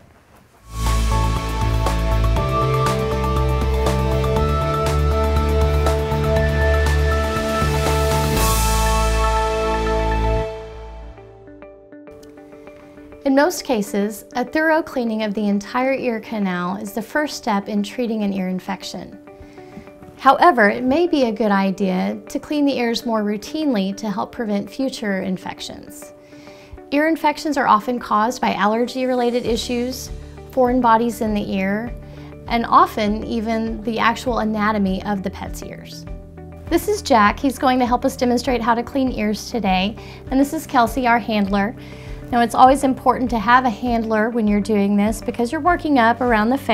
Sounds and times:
Music: 0.6 - 46.7
Speech: 13.2 - 19.1, 20.2 - 26.0, 27.0 - 36.0, 36.7 - 46.7.

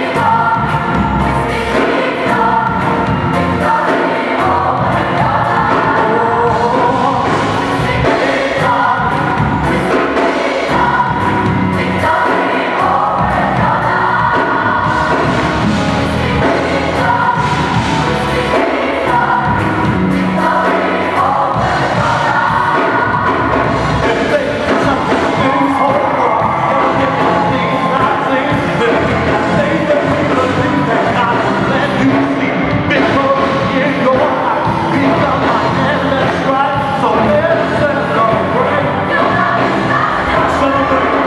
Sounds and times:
Choir: 0.0 - 41.2
Gospel music: 0.0 - 41.2.

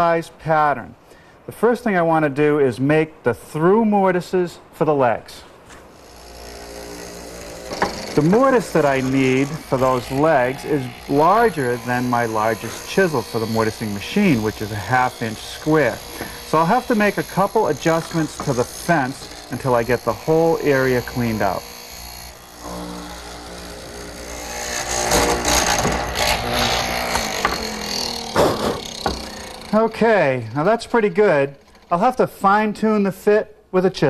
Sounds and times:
Speech: 0.0 - 5.5, 8.2 - 21.6, 29.7 - 34.0
Wood: 5.7 - 30.0
Tools: 7.7 - 8.4, 15.4 - 19.8, 25.7 - 29.7.

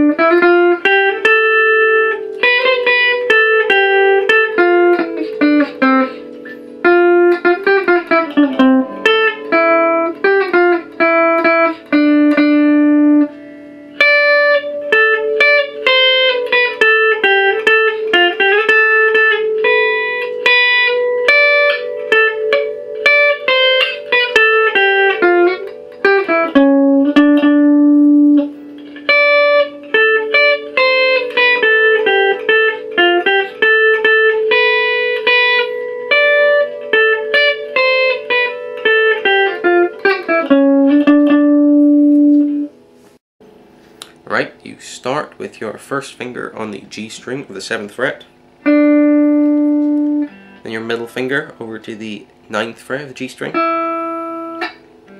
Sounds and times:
Electric guitar: 0.0 - 43.2, 47.2 - 51.2, 53.4 - 55.2
Strum: 0.0 - 55.2.

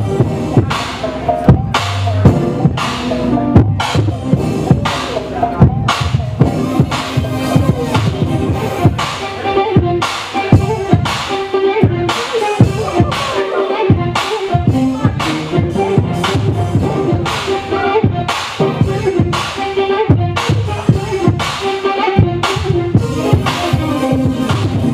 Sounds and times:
Blues: 0.0 - 24.9.

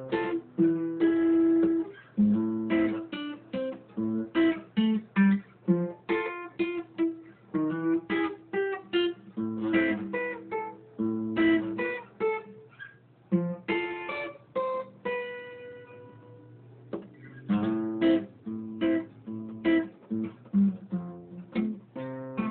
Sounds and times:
Acoustic guitar: 0.0 - 22.5.

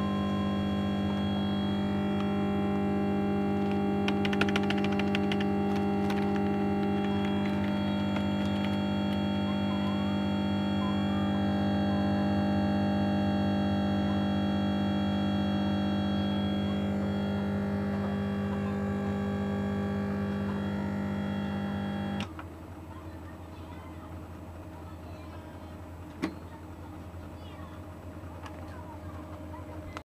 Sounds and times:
Speech: 9.4 - 12.4, 17.9 - 18.9, 22.8 - 30.1.

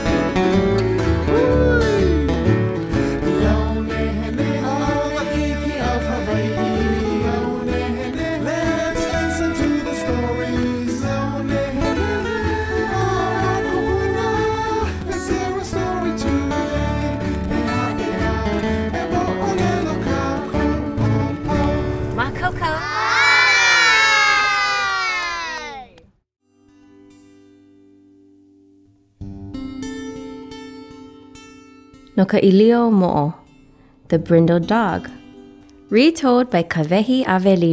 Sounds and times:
Music: 0.0 - 22.9, 26.4 - 37.7
Speech: 22.2 - 22.9, 32.2 - 33.4, 34.1 - 35.1, 35.9 - 37.7.

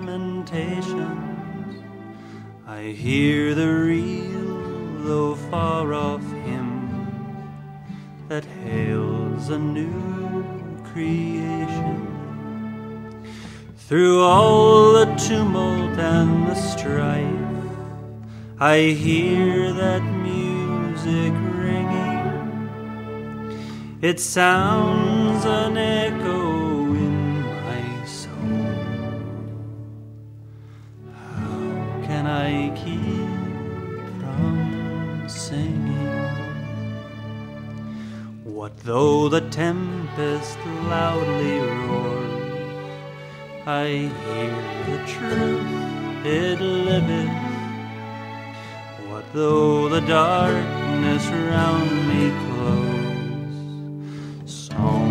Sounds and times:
Male singing: 0.0 - 1.5, 2.7 - 7.2, 8.3 - 12.4, 13.8 - 17.8, 18.6 - 22.6, 24.0 - 28.6, 31.1 - 36.8, 38.4 - 42.7, 43.6 - 47.8, 48.9 - 53.8, 54.5 - 55.1
Orchestra: 0.0 - 55.1.

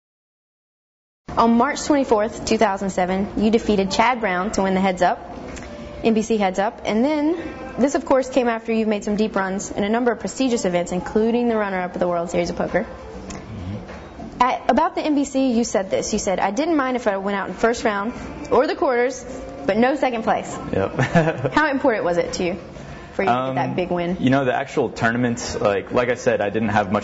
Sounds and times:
Music: 1.3 - 27.0.

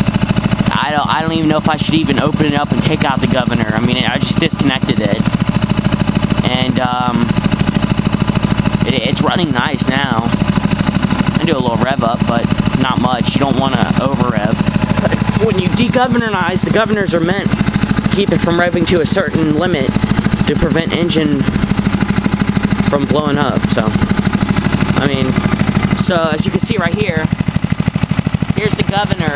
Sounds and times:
Speech: 0.7 - 5.3, 6.4 - 7.3, 8.8 - 10.4, 11.4 - 17.5, 18.1 - 21.5, 22.9 - 24.0, 25.0 - 25.4, 26.0 - 27.3, 28.6 - 29.3.

